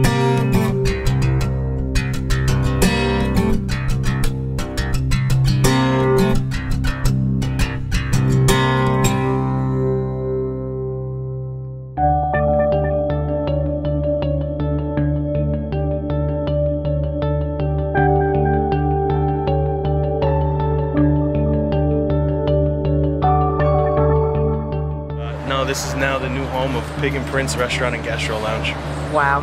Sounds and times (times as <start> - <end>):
Music: 0.0 - 29.4.